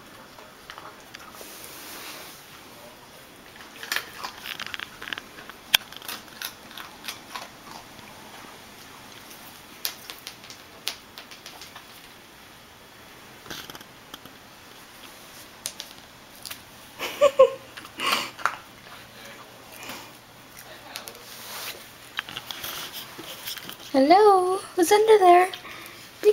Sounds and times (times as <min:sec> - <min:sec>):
Speech: 0:23.9 - 0:25.6.